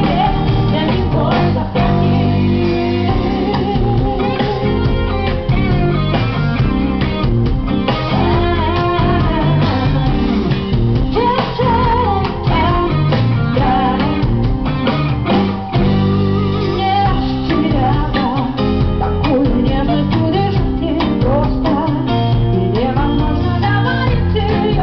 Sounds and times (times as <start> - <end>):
Female singing: 0.0 - 4.7, 8.1 - 10.5, 11.1 - 14.4, 16.6 - 24.8
Music: 0.0 - 24.8.